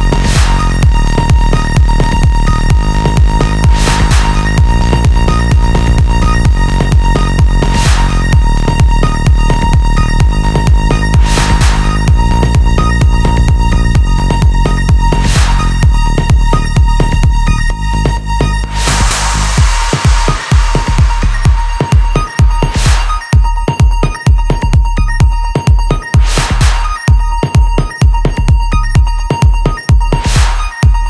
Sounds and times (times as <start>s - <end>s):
Trance music: 0.0s - 31.1s.